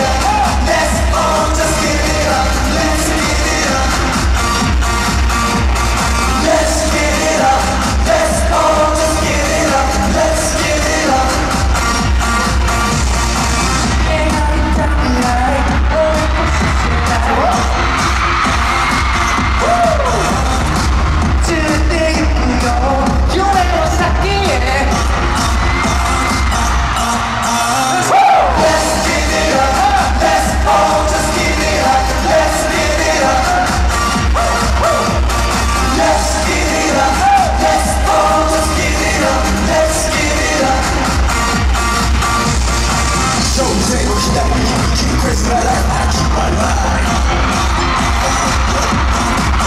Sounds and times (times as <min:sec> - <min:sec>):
Disco: 0:00.0 - 0:49.6.